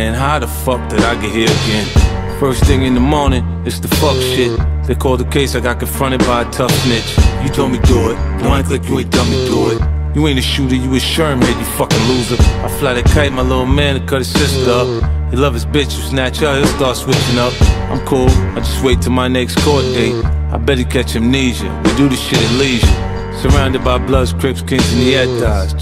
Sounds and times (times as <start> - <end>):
Music: 0.0 - 25.8.